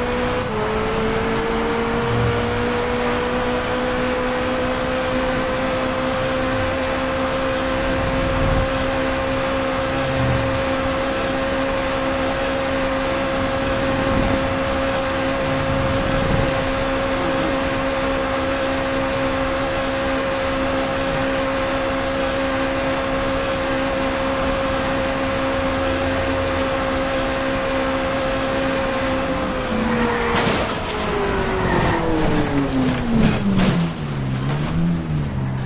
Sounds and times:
Car: 0.0s - 35.6s.

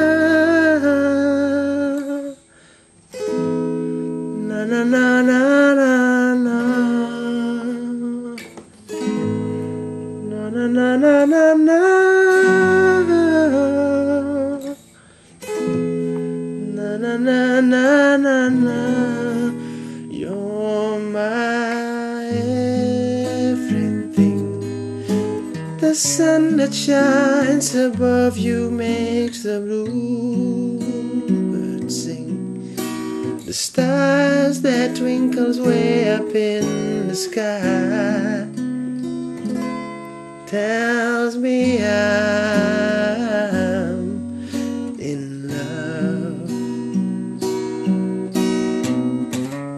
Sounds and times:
Acoustic guitar: 0.0s - 49.7s
Strum: 0.0s - 49.7s.

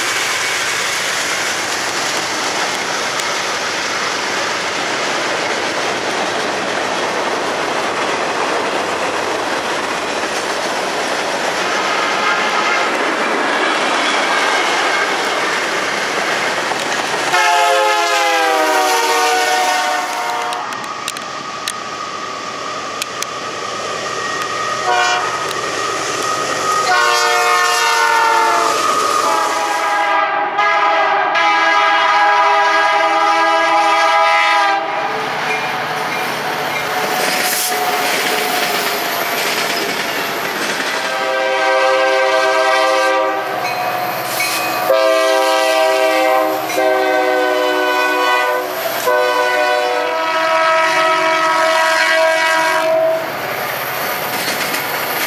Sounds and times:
Clickety-clack: 0.0s - 17.4s, 35.5s - 41.3s, 54.1s - 55.2s
Railroad car, train wagon: 0.0s - 55.2s
Train horn: 12.2s - 13.0s, 17.3s - 20.8s, 24.8s - 25.5s, 26.8s - 35.2s, 37.5s - 38.6s, 41.1s - 43.8s, 44.7s - 53.3s.

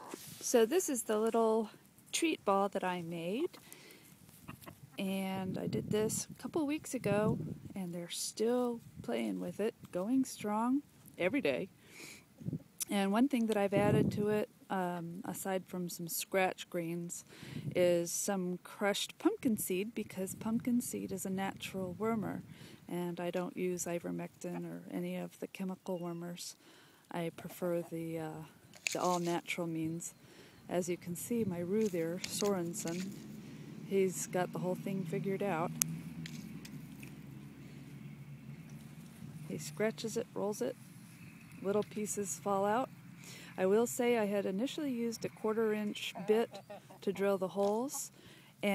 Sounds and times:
Speech: 5.0s - 11.7s, 12.8s - 17.2s, 17.8s - 30.1s, 39.5s - 40.8s, 41.6s - 42.9s, 43.6s - 48.7s.

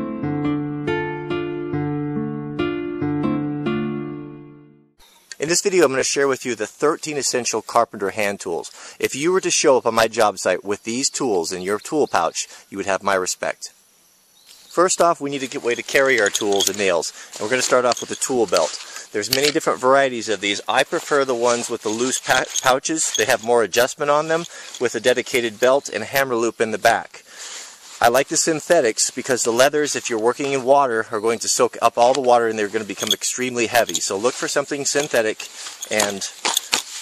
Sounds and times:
Speech: 5.4s - 13.8s, 14.7s - 27.3s, 28.0s - 36.4s.

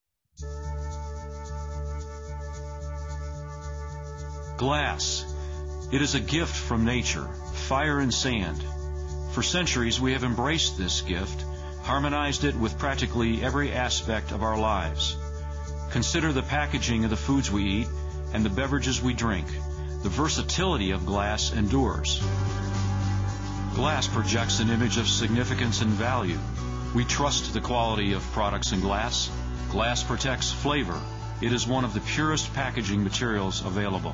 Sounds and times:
Music: 0.4s - 34.1s
Speech: 4.6s - 8.7s, 9.3s - 15.2s, 15.9s - 22.3s, 23.8s - 34.1s.

